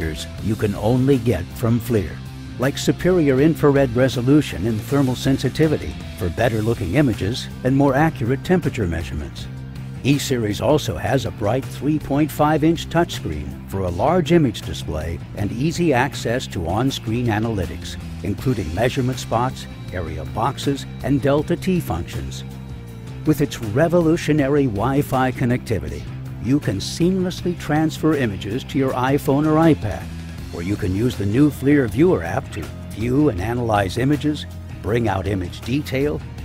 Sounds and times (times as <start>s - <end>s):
Speech: 0.0s - 22.4s, 23.3s - 36.2s
Music: 0.0s - 36.4s.